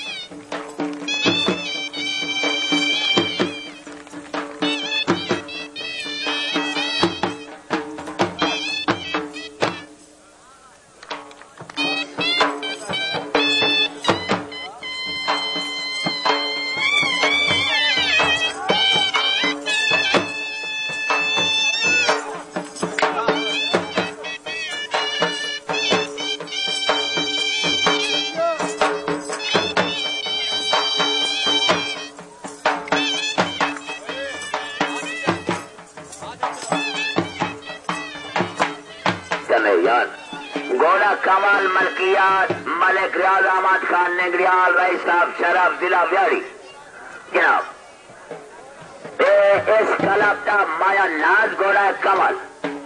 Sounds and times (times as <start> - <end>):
Music: 0.0 - 46.5, 47.7 - 52.8.